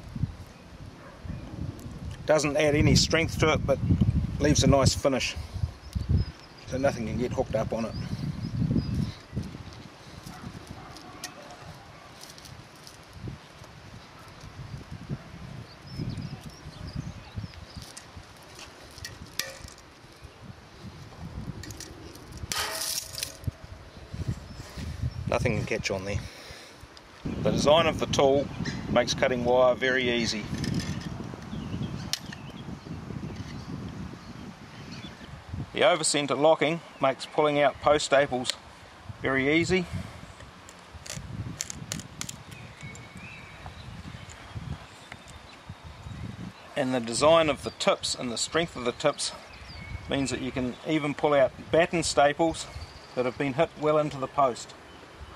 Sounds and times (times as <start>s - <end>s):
Speech: 2.3s - 3.8s, 4.4s - 5.4s, 6.7s - 8.0s, 25.3s - 26.2s, 27.4s - 30.5s, 35.8s - 38.6s, 39.2s - 39.9s, 46.8s - 49.4s, 50.1s - 54.8s.